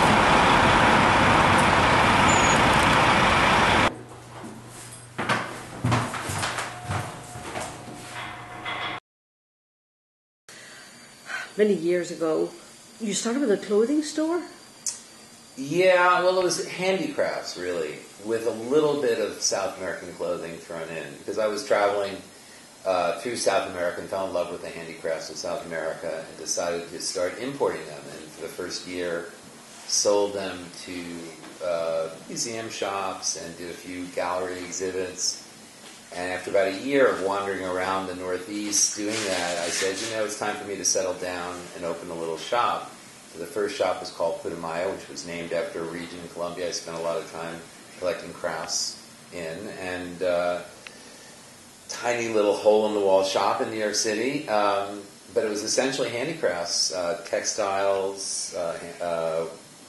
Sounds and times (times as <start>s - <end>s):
Speech: 15.6s - 22.3s, 22.9s - 35.4s, 36.1s - 50.7s, 51.9s - 59.6s.